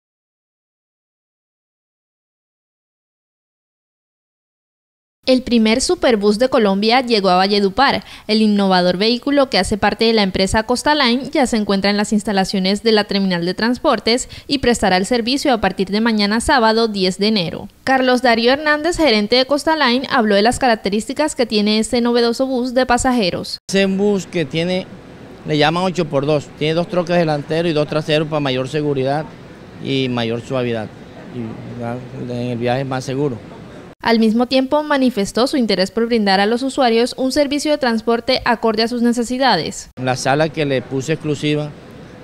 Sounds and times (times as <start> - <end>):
Speech: 5.3 - 24.9, 25.5 - 41.8.